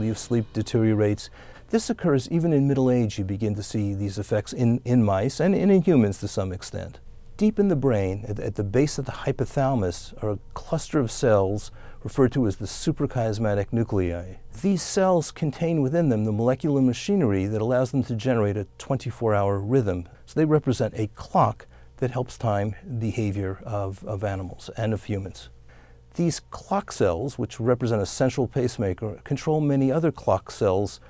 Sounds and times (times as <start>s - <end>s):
Speech: 0.0s - 31.0s.